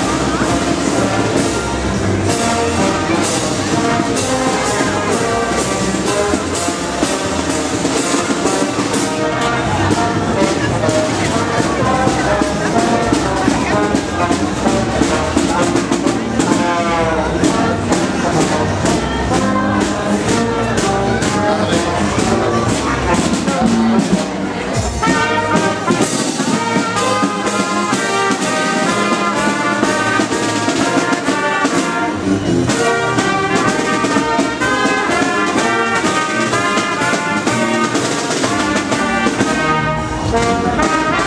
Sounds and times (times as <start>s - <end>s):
Music: 0.0s - 41.2s
Speech: 0.0s - 41.2s.